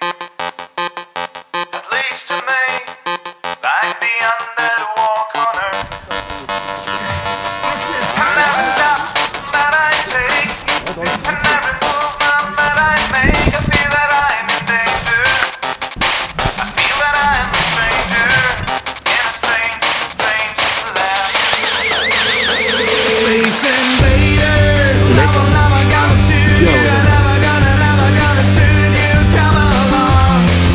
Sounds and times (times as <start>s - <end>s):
Music: 0.0s - 30.7s
Outside, urban or manmade: 0.0s - 30.7s
Speech: 10.9s - 11.7s, 25.0s - 27.4s.